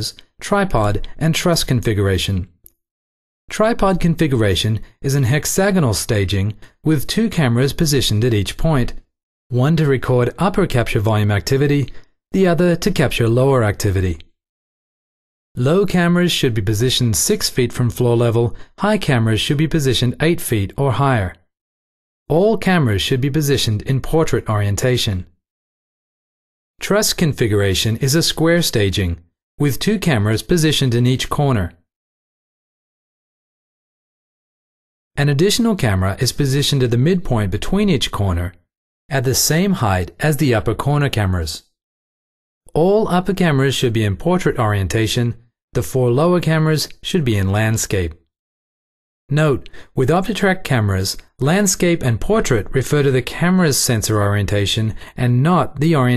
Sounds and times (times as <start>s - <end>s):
Speech: 0.0s - 2.6s, 3.5s - 14.3s, 15.6s - 21.5s, 22.3s - 25.3s, 26.8s - 31.8s, 35.2s - 41.7s, 42.7s - 48.2s, 49.3s - 56.1s.